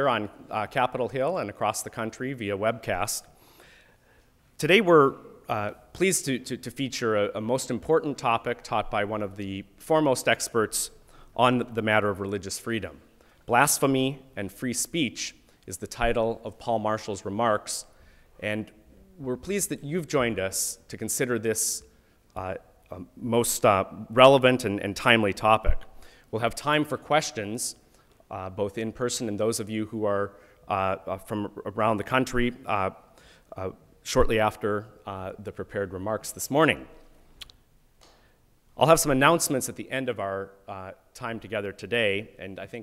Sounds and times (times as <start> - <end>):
Male speech, man speaking: 0.0 - 3.2, 4.6 - 25.8, 26.4 - 33.0, 33.6 - 36.9, 38.8 - 42.8
Narration, monologue: 0.0 - 42.8.